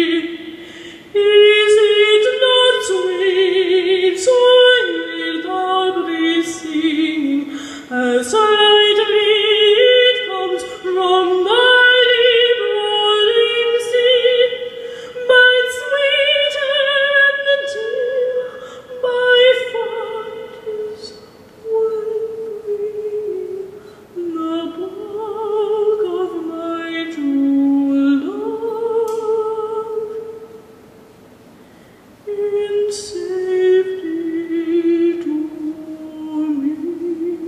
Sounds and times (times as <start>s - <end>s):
Singing: 0.0s - 30.5s, 32.3s - 37.4s
A capella: 0.0s - 30.8s, 32.2s - 37.4s.